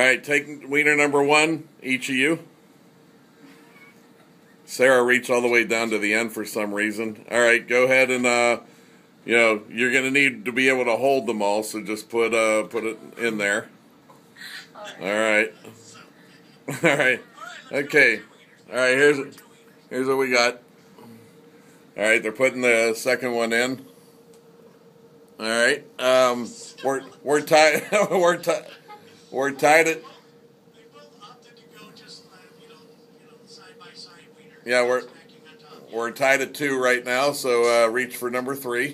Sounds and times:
Speech: 30.8 - 38.9.

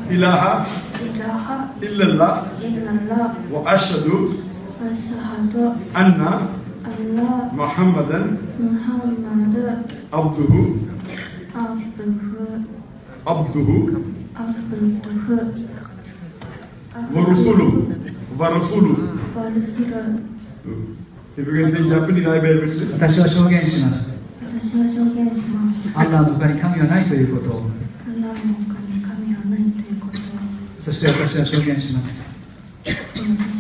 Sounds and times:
Inside, large room or hall: 0.0 - 33.6
Male speech, man speaking: 0.1 - 0.8, 1.8 - 2.5, 3.5 - 4.4, 6.0 - 6.6, 7.6 - 8.4, 10.2 - 11.0, 13.2 - 14.1, 17.1 - 19.2, 20.7 - 24.2, 26.0 - 27.9, 30.8 - 32.3.

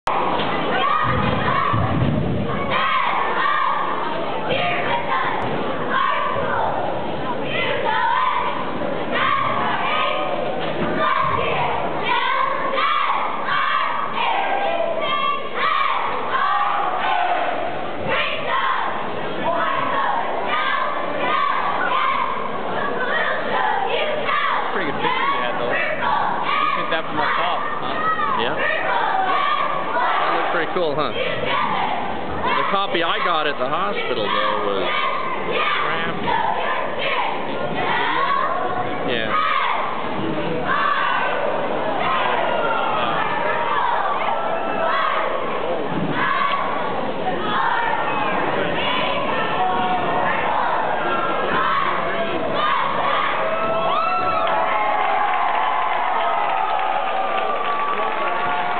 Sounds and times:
Cheering: 0.1 - 6.8, 7.5 - 33.4, 34.1 - 40.0, 40.6 - 58.7.

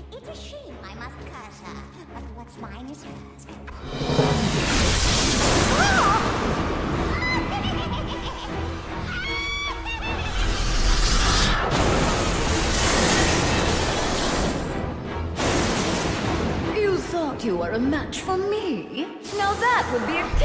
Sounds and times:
Music: 0.0 - 20.4.

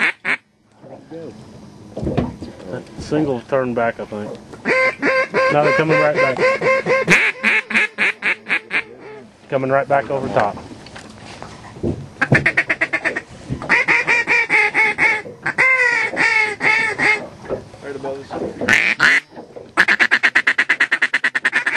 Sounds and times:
Quack: 0.0 - 0.4, 4.6 - 9.2, 12.2 - 17.2, 18.7 - 21.7
Speech: 8.9 - 10.6, 17.8 - 18.4.

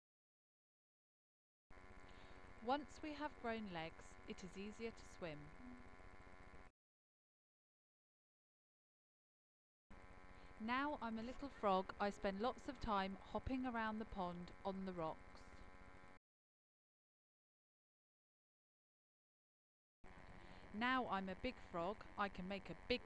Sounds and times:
Speech: 2.6 - 5.8, 10.6 - 15.2, 20.7 - 23.0.

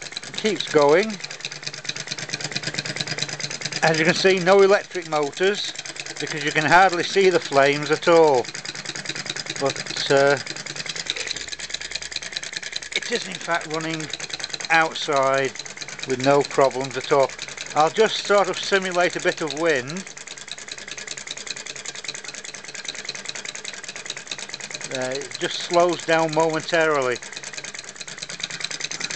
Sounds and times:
Speech: 0.3 - 1.2, 3.8 - 8.4, 9.6 - 10.4, 13.0 - 14.1, 14.7 - 15.5, 16.1 - 20.0, 24.9 - 27.2.

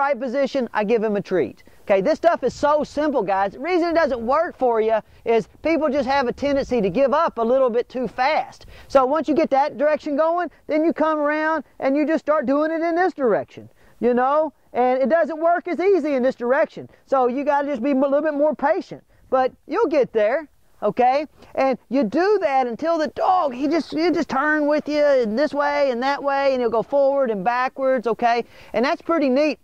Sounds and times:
Speech: 0.0 - 29.6.

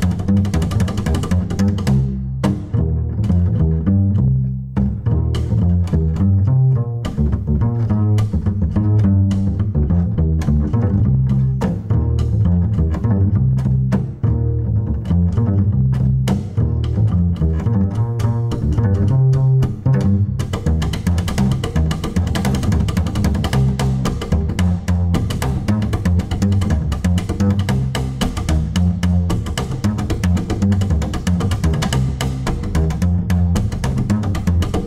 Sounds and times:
Pizzicato: 0.0 - 34.8.

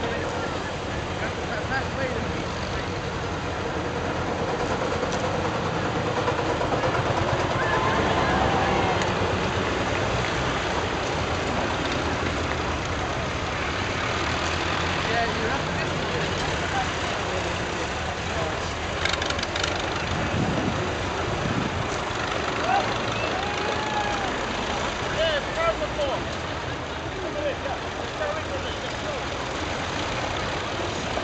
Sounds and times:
Speech: 0.0 - 3.0, 15.0 - 19.0, 25.1 - 26.3, 27.0 - 29.4.

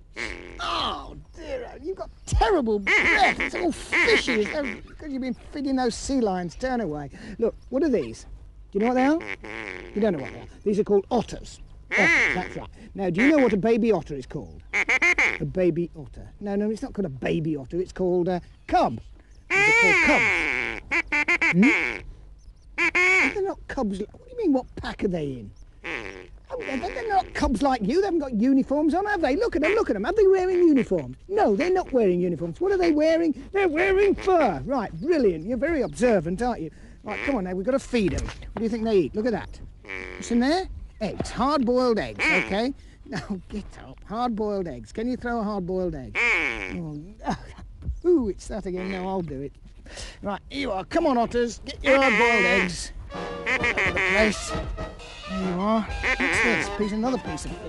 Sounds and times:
Speech: 0.6 - 9.2, 10.0 - 14.6, 15.4 - 20.3, 23.2 - 25.5, 26.5 - 39.6, 40.2 - 49.5, 50.2 - 52.9, 54.0 - 54.6, 55.3 - 57.6.

